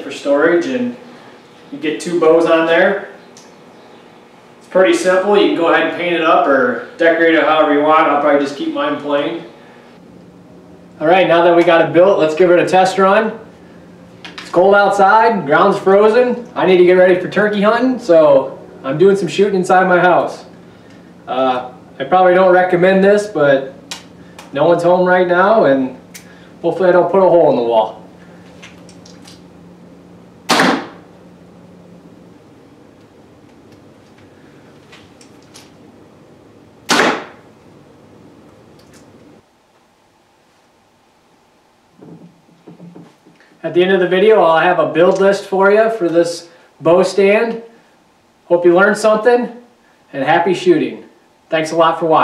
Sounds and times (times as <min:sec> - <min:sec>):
Arrow: 0:30.5 - 0:31.0, 0:36.9 - 0:37.4.